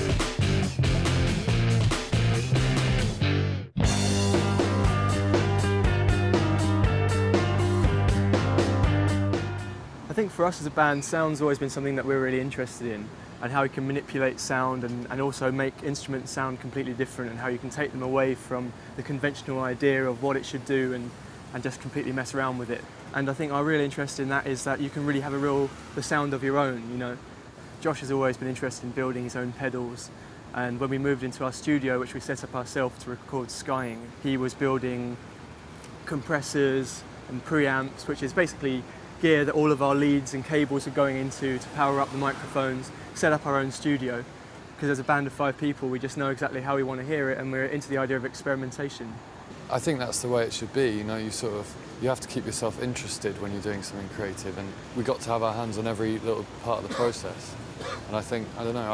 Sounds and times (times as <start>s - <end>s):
Speech: 10.1s - 27.2s, 27.8s - 35.2s, 36.0s - 58.9s.